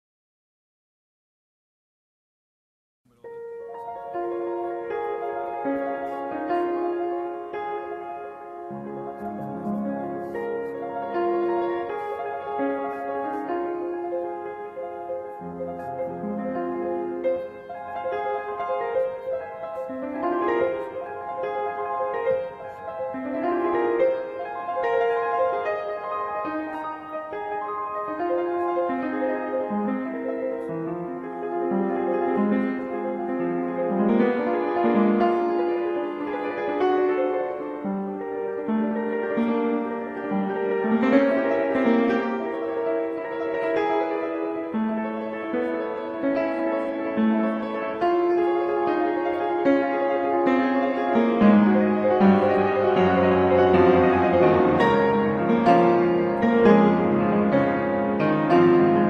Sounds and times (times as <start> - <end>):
Piano: 3.1 - 59.0.